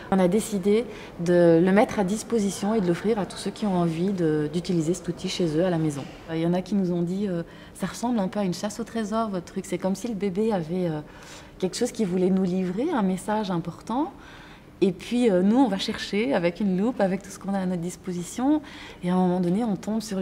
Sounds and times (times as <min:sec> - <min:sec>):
Speech: 0:00.1 - 0:14.2, 0:14.8 - 0:20.2.